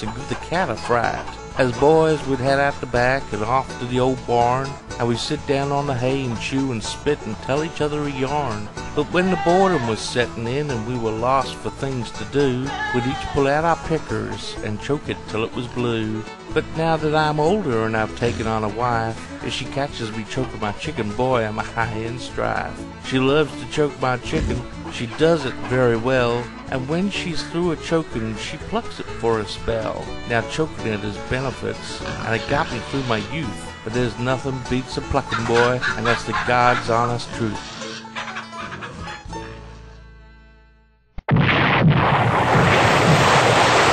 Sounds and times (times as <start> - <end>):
Speech: 0.0 - 38.0
Music: 0.0 - 41.2.